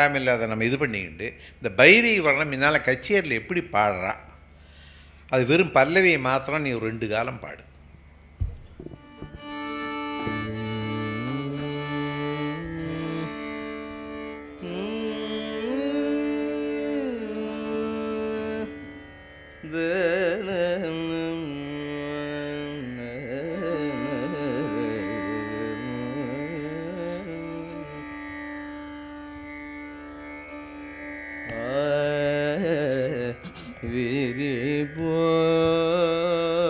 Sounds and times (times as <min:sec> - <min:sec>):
Speech: 0:00.0 - 0:04.2, 0:05.3 - 0:07.7
Carnatic music: 0:00.0 - 0:36.6.